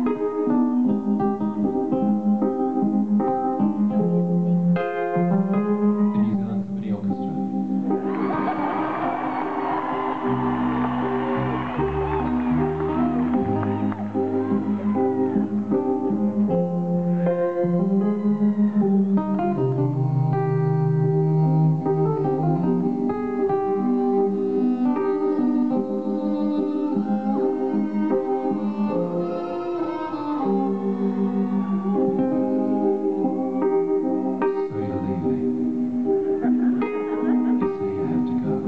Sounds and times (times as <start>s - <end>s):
Music: 0.0s - 38.6s.